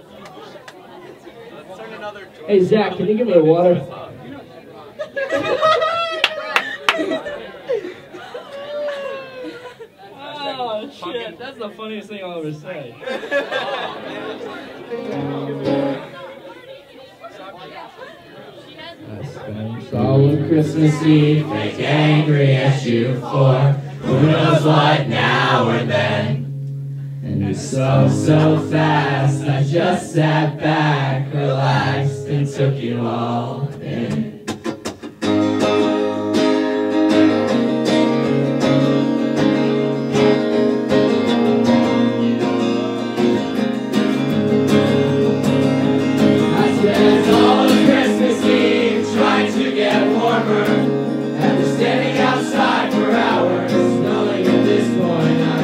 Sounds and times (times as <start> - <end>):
Music: 14.9 - 16.1, 20.2 - 29.7, 33.8 - 55.6.